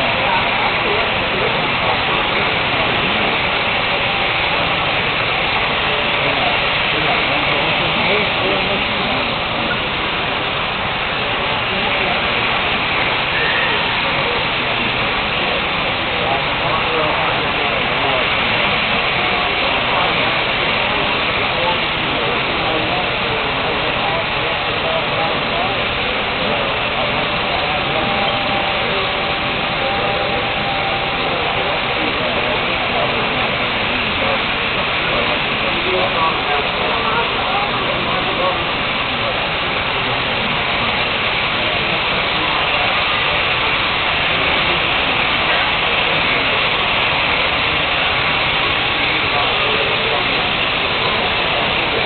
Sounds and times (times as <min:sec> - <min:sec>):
Speech: 0:00.0 - 0:52.0.